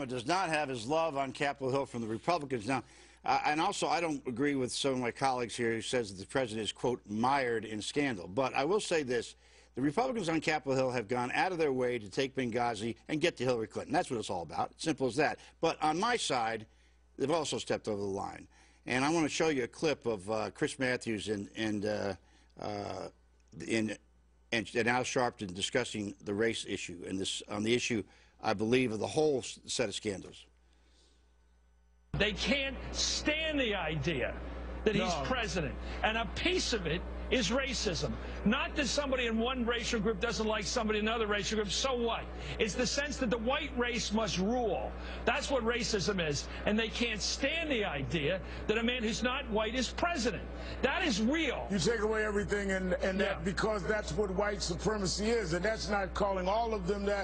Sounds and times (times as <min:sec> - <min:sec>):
Speech: 0:00.0 - 0:30.5, 0:32.2 - 0:57.2.